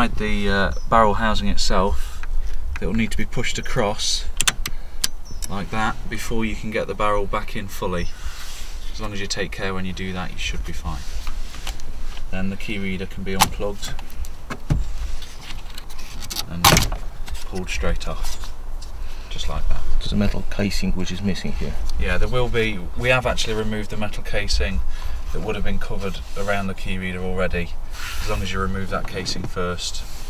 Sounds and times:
Speech: 0.0 - 2.0, 2.8 - 4.3, 5.5 - 8.1, 9.0 - 11.0, 12.3 - 14.0, 16.5 - 16.9, 17.5 - 18.4, 19.3 - 30.1.

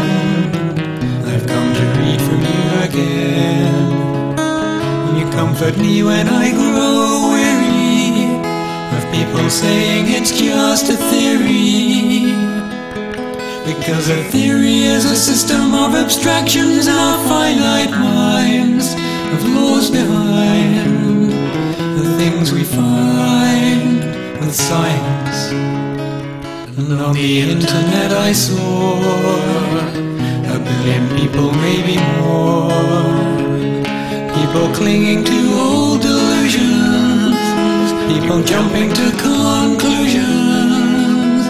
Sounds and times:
Music: 0.0 - 41.4.

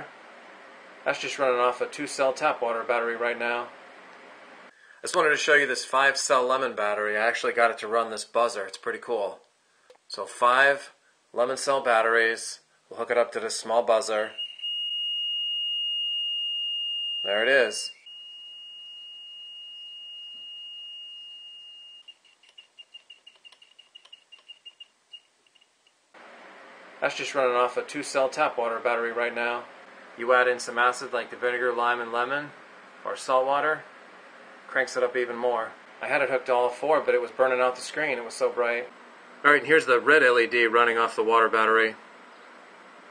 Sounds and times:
Speech: 1.1 - 3.7, 5.0 - 9.4, 10.1 - 14.4, 17.3 - 17.9, 27.0 - 33.9, 34.7 - 42.0.

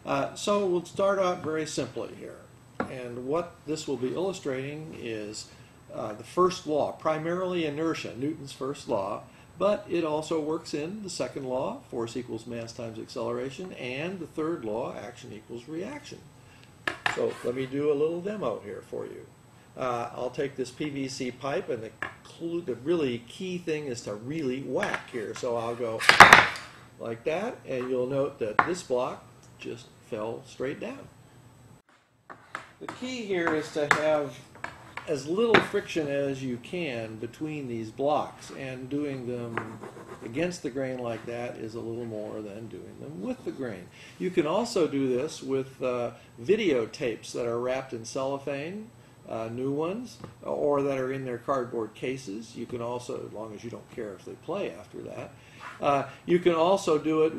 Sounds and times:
Speech: 0.0 - 16.3, 17.1 - 26.1, 27.0 - 31.1, 32.8 - 57.3.

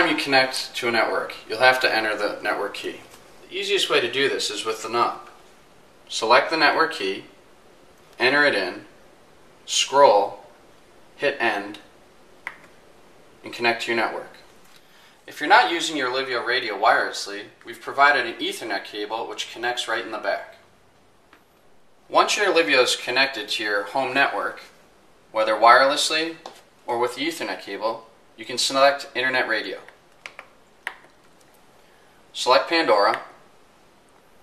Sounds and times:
Speech: 0.0 - 5.4, 6.1 - 7.4, 8.2 - 9.0, 9.7 - 10.5, 11.2 - 11.9, 13.4 - 14.5, 15.3 - 20.7, 22.1 - 30.0, 32.3 - 33.4.

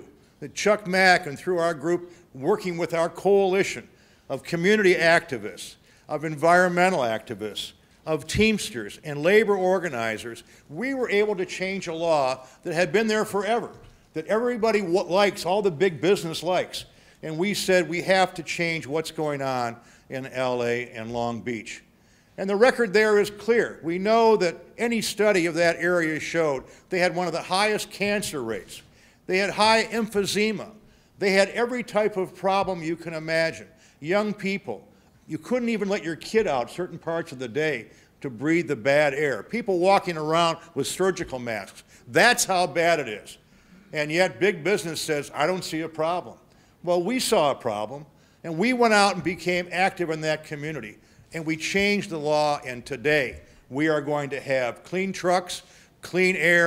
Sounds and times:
Male speech, man speaking: 0.0 - 21.8, 22.4 - 56.6
Narration, monologue: 0.0 - 56.6.

